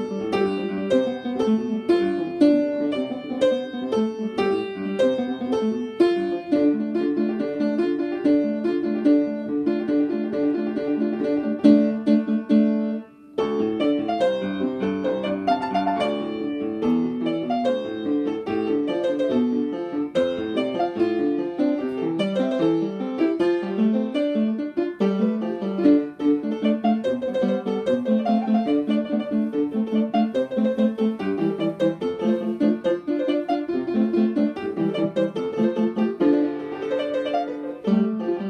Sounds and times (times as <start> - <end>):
Music: 0.0 - 38.5.